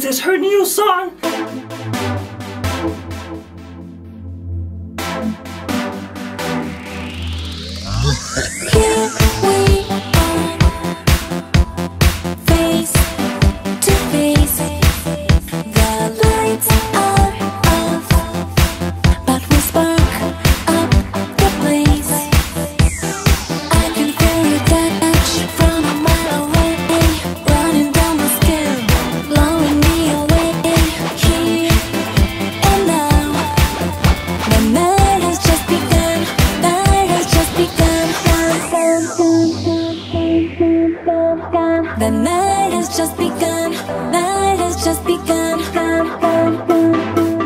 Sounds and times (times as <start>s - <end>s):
Music: 0.0s - 47.4s.